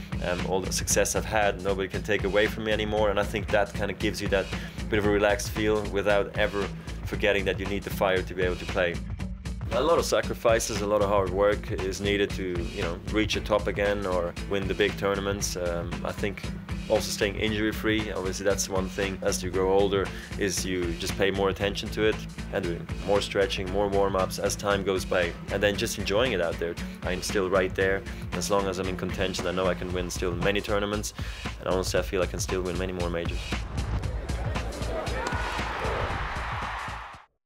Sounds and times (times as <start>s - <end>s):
Music: 0.0s - 37.4s
Speech: 0.2s - 9.0s, 9.7s - 33.6s.